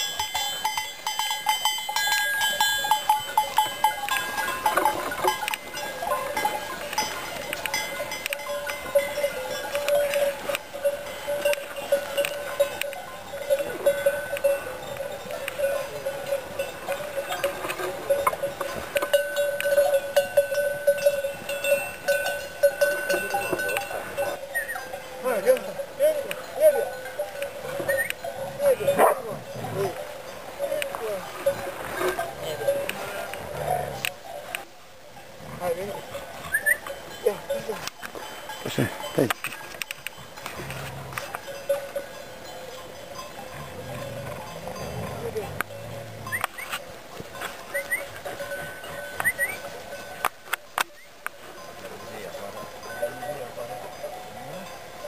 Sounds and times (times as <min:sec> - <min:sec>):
Goat: 0:35.4 - 0:55.0.